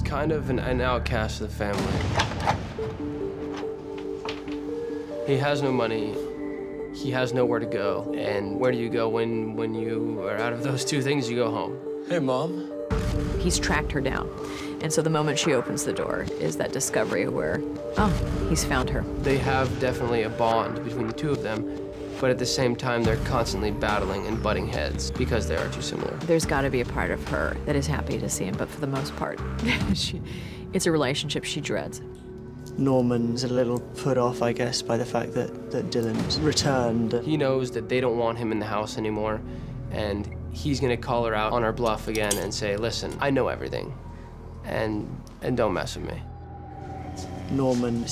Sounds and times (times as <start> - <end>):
Music: 0.0 - 48.1.